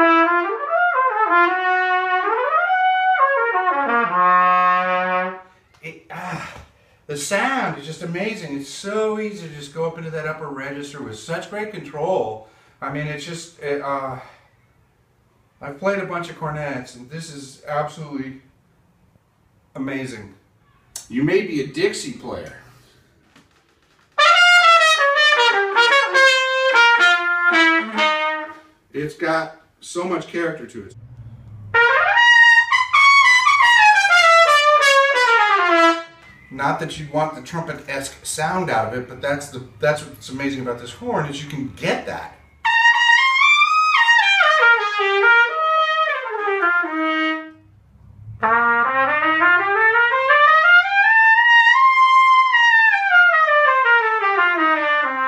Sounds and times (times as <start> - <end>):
Trumpet: 0.0 - 5.7, 24.1 - 28.9, 31.7 - 36.4, 42.5 - 47.7, 48.4 - 55.2
Wind instrument, woodwind instrument: 31.8 - 36.4, 42.6 - 47.6.